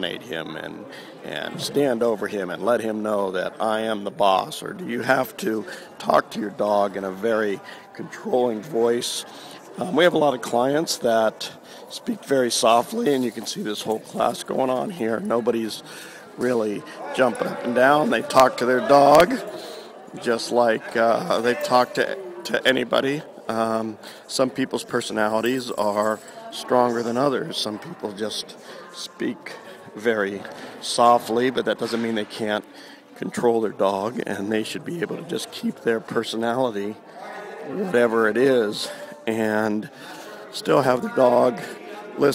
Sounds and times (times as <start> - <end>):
Speech: 0.0 - 42.3.